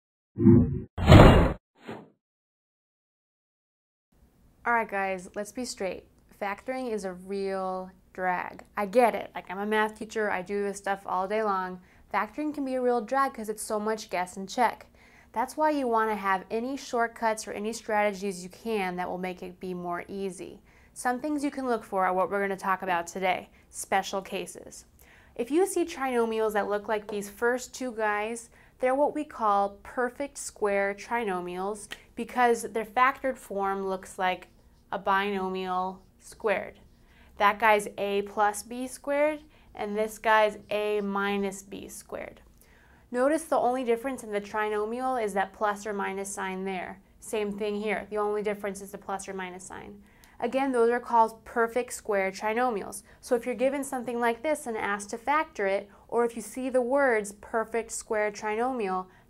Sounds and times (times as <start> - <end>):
Inside, small room: 4.2 - 59.2
Speech: 4.6 - 36.8, 37.4 - 42.4, 43.1 - 59.1.